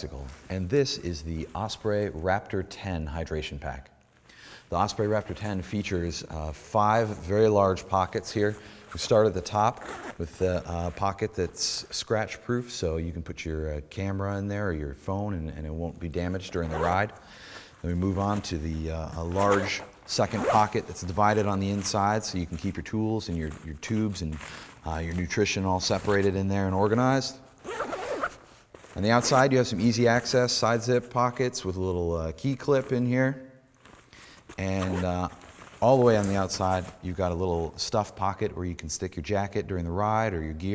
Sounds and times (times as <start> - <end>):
Speech: 0.0 - 4.0, 4.7 - 17.2, 17.8 - 28.0, 28.9 - 33.6, 34.6 - 40.7.